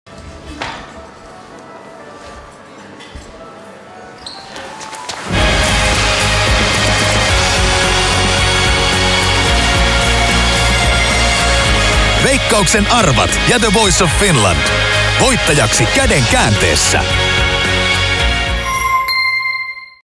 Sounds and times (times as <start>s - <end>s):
Music: 0.1s - 20.0s
Speech: 12.2s - 17.1s.